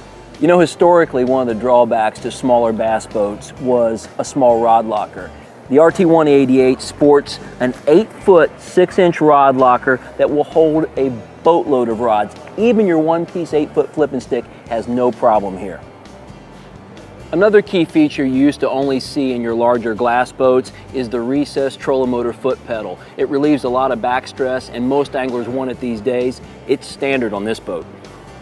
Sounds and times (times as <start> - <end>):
Music: 0.0 - 28.4
Speech: 0.4 - 15.8, 17.3 - 27.9.